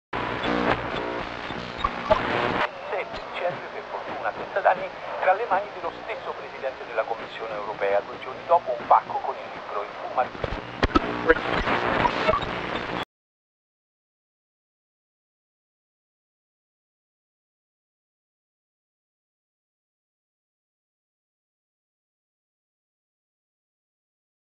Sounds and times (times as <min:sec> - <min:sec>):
Speech: 0:02.7 - 0:12.3.